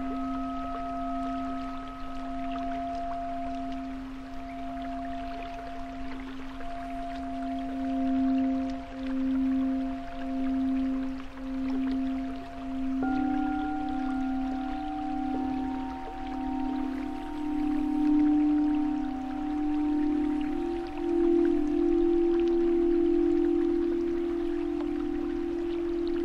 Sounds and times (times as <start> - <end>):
Music: 0.0 - 26.2.